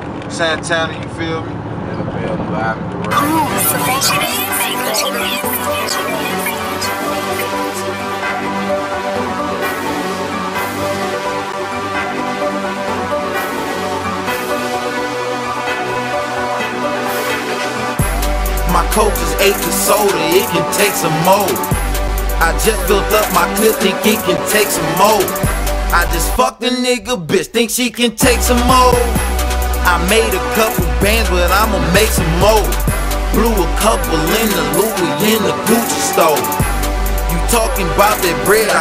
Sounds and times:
Soundtrack music: 3.1 - 26.4, 28.2 - 38.8.

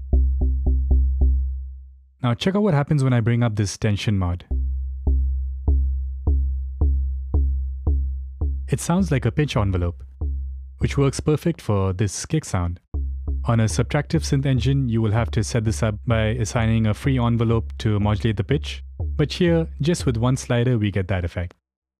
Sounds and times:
Speech: 2.2 - 4.5, 8.7 - 10.0, 10.8 - 12.8, 13.5 - 21.6.

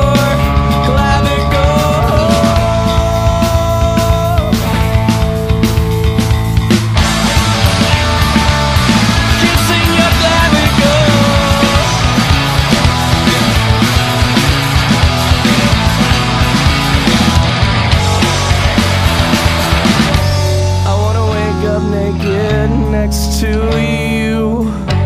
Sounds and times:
Grunge: 0.0 - 25.0.

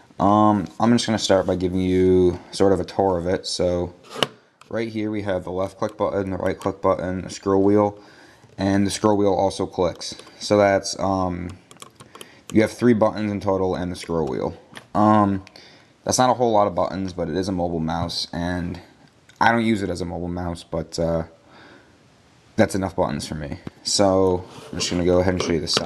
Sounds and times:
Speech: 0.2 - 4.0, 4.7 - 8.0, 8.6 - 11.6, 12.5 - 21.4, 22.6 - 25.8.

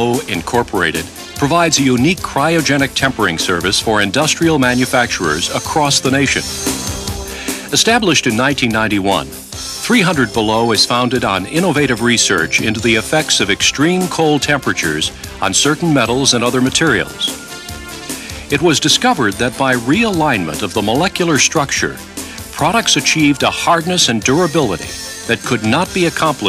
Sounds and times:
Speech: 0.0 - 6.5, 7.7 - 17.4, 18.5 - 26.4
Music: 0.0 - 26.4.

